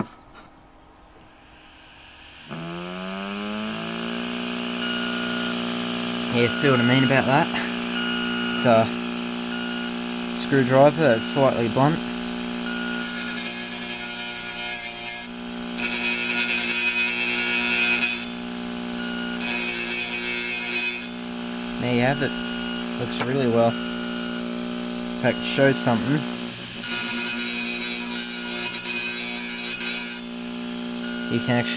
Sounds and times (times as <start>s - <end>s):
Speech: 6.3s - 7.7s, 8.6s - 8.9s, 10.4s - 12.0s, 21.8s - 22.4s, 23.0s - 23.8s, 25.2s - 26.3s, 31.3s - 31.7s.